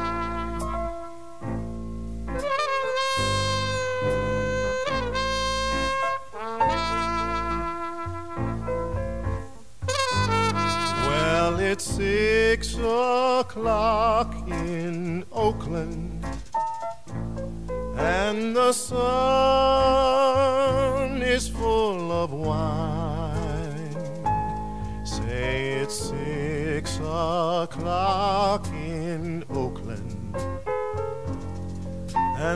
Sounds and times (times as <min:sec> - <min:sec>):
Saxophone: 0:00.0 - 0:01.7, 0:02.3 - 0:12.6.